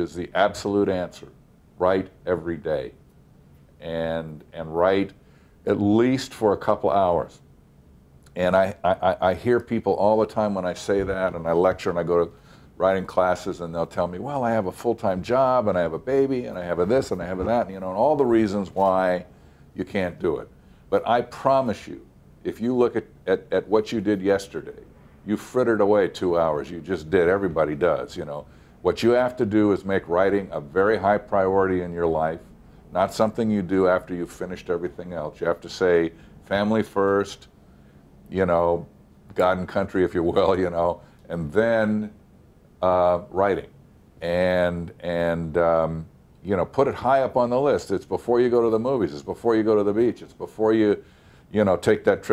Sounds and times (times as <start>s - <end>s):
Speech: 0.0s - 3.0s, 3.8s - 7.4s, 8.3s - 37.6s, 38.3s - 42.2s, 42.8s - 52.3s.